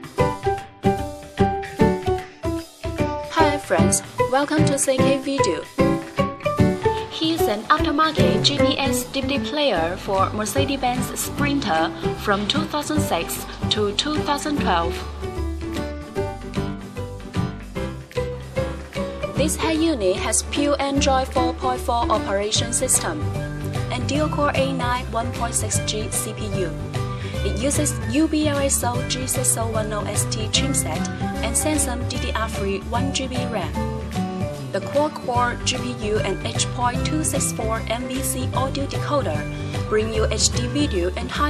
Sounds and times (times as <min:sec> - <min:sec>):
Music: 0:00.0 - 0:41.4
Speech: 0:03.3 - 0:05.7, 0:07.1 - 0:15.0, 0:19.4 - 0:23.2, 0:23.9 - 0:26.8, 0:27.4 - 0:33.8, 0:34.8 - 0:41.4.